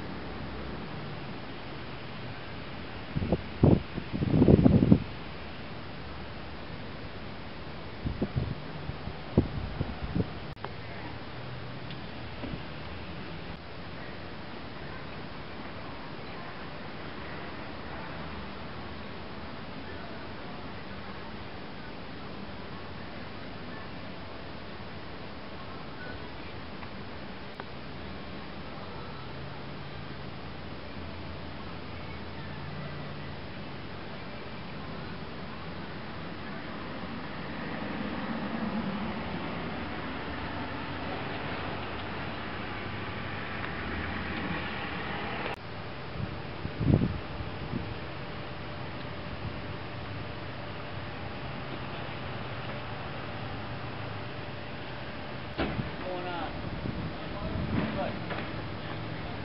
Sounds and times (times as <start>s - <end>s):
Outside, urban or manmade: 0.0s - 59.4s
Vehicle: 0.0s - 59.4s.